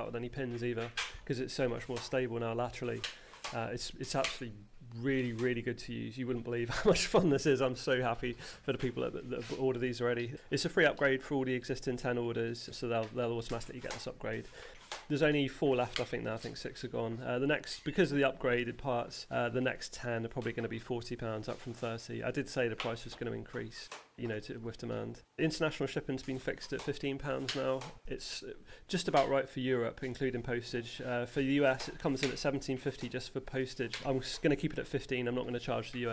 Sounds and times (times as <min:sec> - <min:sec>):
Speech: 0:00.0 - 0:14.5, 0:15.1 - 0:36.1.